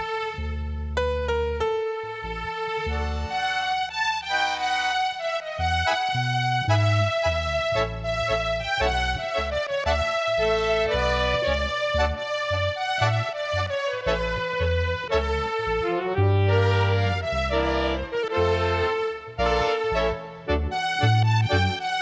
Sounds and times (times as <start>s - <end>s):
Bowed string instrument: 0.0s - 22.0s.